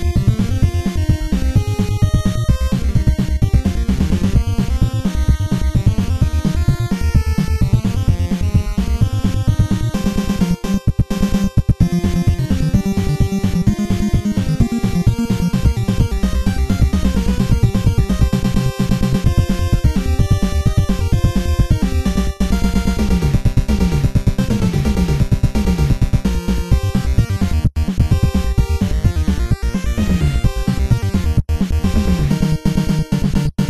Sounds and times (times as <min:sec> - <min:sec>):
Music: 0:00.0 - 0:33.6.